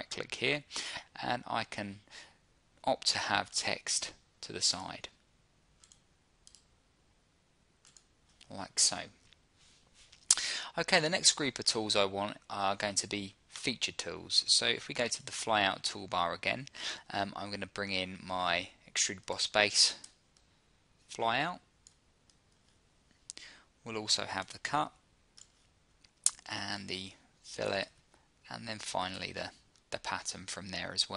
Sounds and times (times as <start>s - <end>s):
Speech: 0.0s - 2.1s, 2.8s - 5.2s, 8.4s - 9.2s, 10.7s - 20.1s, 21.1s - 21.7s, 23.8s - 25.0s, 26.3s - 31.1s
Clicking: 5.8s - 6.7s.